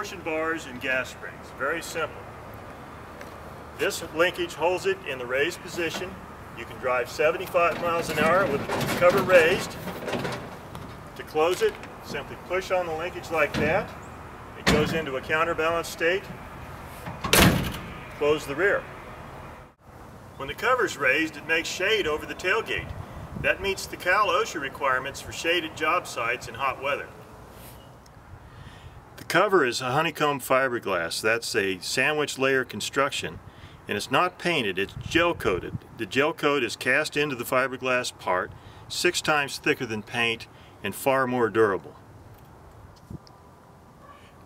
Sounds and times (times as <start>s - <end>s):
Speech: 0.0s - 2.2s, 3.8s - 9.8s, 11.2s - 13.9s, 14.6s - 16.3s, 18.2s - 18.9s, 20.4s - 27.2s, 29.2s - 42.0s.